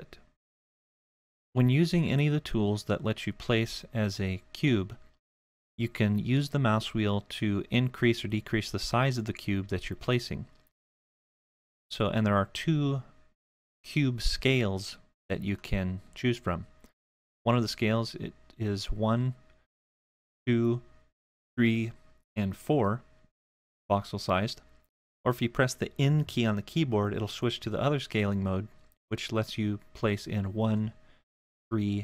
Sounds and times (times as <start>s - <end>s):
Speech: 0.0s - 0.3s, 1.6s - 5.1s, 5.8s - 10.6s, 11.9s - 13.2s, 13.8s - 16.8s, 17.5s - 19.4s, 20.5s - 21.0s, 21.6s - 23.1s, 23.9s - 24.7s, 25.3s - 31.0s, 31.7s - 32.0s.